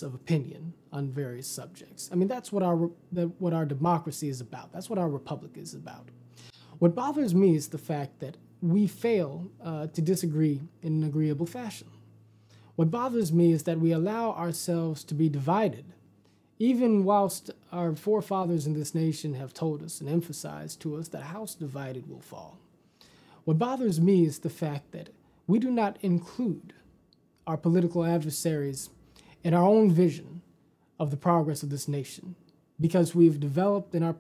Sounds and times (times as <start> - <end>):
Speech: 0.0 - 6.2, 6.8 - 12.0, 12.8 - 16.0, 16.6 - 22.7, 23.4 - 34.2.